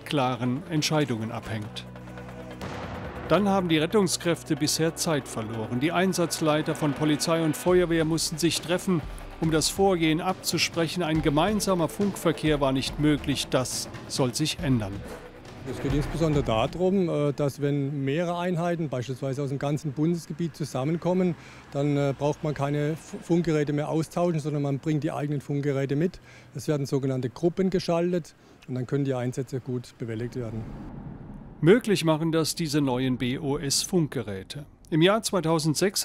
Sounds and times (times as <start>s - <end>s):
Speech: 0.0s - 1.9s, 3.3s - 15.1s, 15.7s - 30.7s, 31.6s - 36.0s.